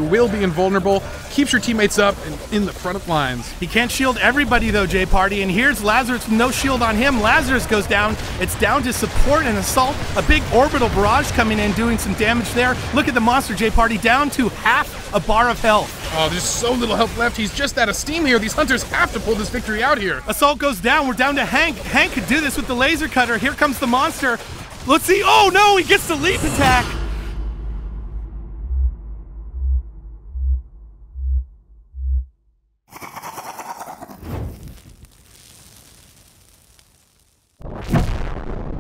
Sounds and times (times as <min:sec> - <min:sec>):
Speech: 0:00.0 - 0:27.0.